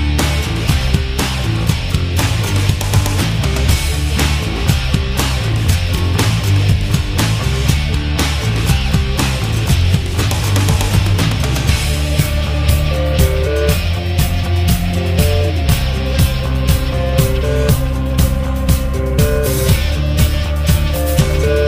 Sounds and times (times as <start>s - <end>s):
Music: 0.0s - 21.6s.